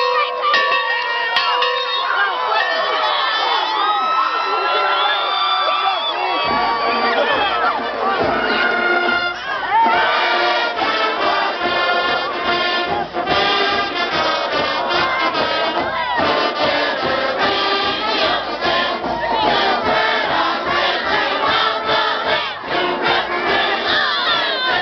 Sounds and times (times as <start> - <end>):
Music: 0.0 - 2.8, 6.2 - 24.8
Speech: 0.0 - 6.5.